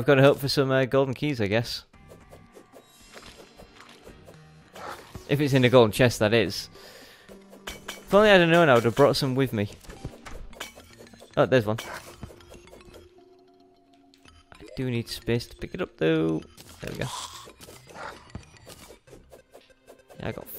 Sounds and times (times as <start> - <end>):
Speech: 0.0 - 1.9, 5.3 - 6.7, 8.1 - 9.8, 11.4 - 11.8, 14.8 - 17.2, 20.2 - 20.5.